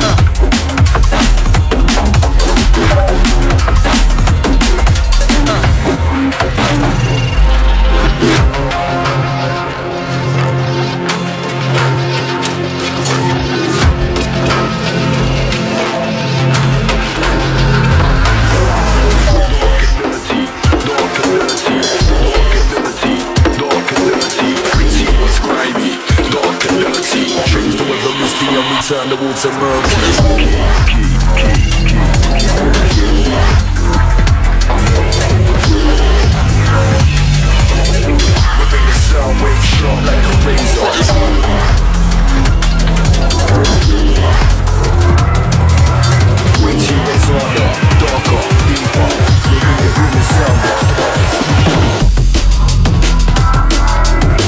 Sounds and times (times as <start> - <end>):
Drum and bass: 0.0 - 54.4.